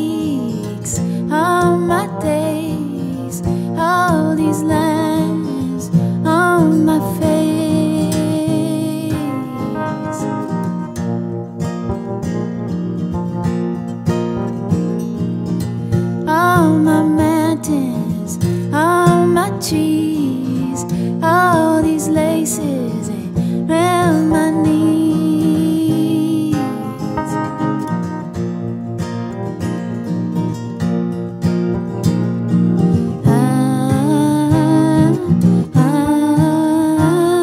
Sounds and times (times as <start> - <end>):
Music: 0.0 - 37.4.